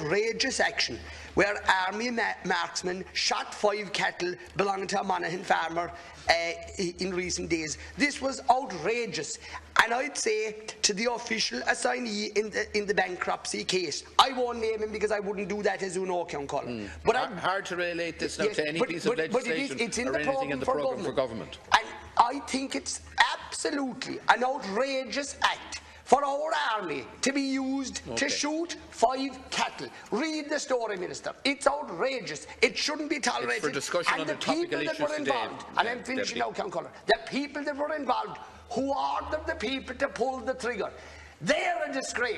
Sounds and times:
Speech: 0.0s - 42.3s.

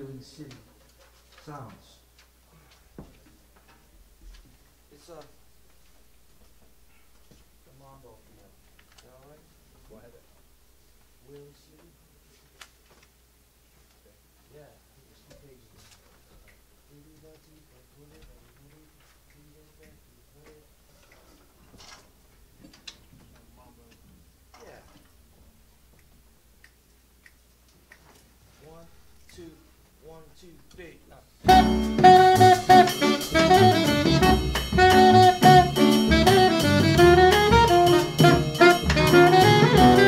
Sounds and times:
Speech: 0.0s - 0.7s, 1.4s - 2.1s, 4.9s - 5.4s, 7.7s - 10.4s, 11.2s - 12.0s, 14.1s - 16.0s, 16.9s - 20.7s, 23.4s - 24.0s, 28.6s - 31.3s.

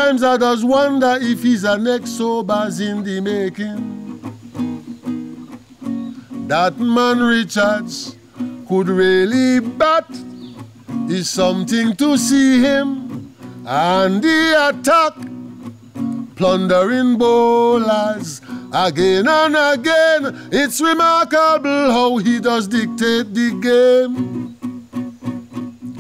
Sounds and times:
Male singing: 0.0s - 4.1s, 6.5s - 10.3s, 11.1s - 15.3s, 16.4s - 24.2s
Music: 0.0s - 26.0s.

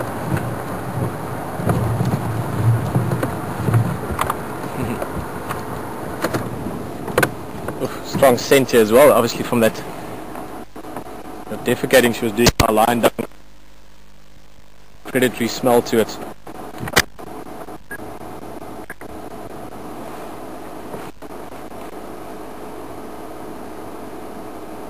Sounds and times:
Speech: 4.8s - 5.0s, 7.8s - 9.9s, 11.5s - 13.3s, 15.1s - 16.3s.

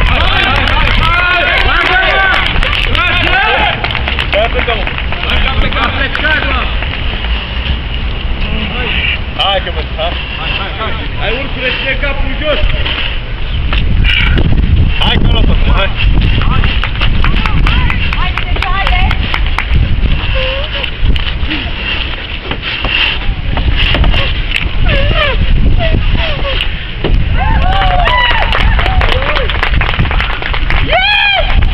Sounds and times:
Vehicle: 0.0s - 31.7s.

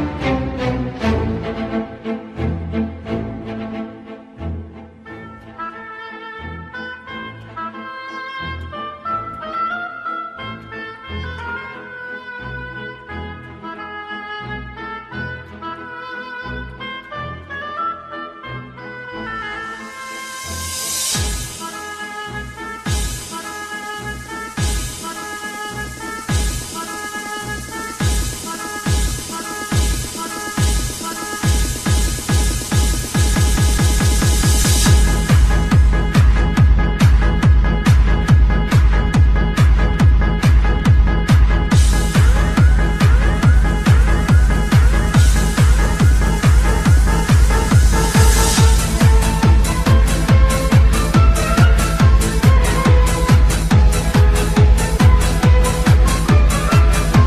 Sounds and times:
Techno: 0.0s - 57.2s.

